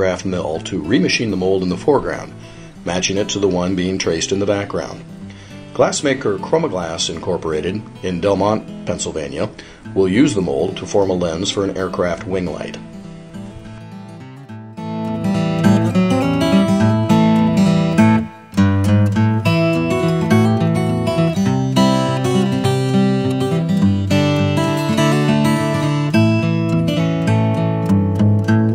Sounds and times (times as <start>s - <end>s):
Speech: 0.0s - 5.0s, 5.8s - 12.8s
Music: 0.0s - 28.7s.